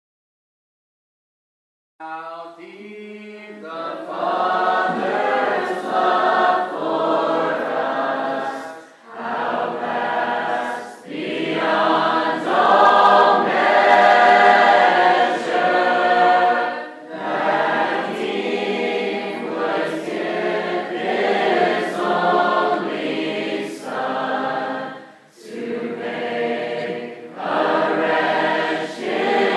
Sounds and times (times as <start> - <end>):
Chant: 2.0 - 29.5.